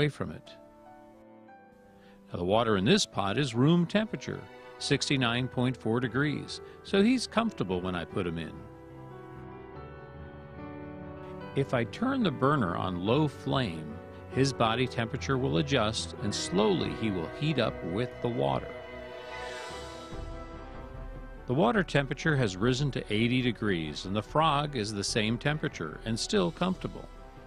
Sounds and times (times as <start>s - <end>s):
Speech: 0.0s - 0.6s, 2.3s - 8.6s, 11.6s - 18.7s, 21.5s - 27.1s
Music: 0.0s - 27.4s.